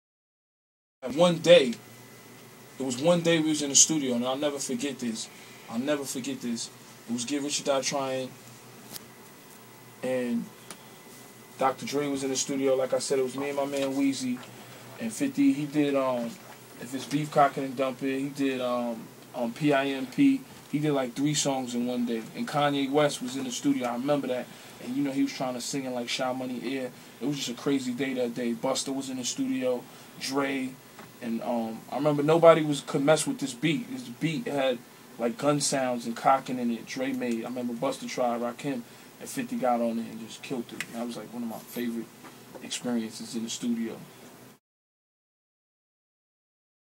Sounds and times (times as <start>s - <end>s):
Speech: 1.0s - 1.8s, 2.8s - 8.4s, 10.0s - 10.5s, 11.6s - 44.1s.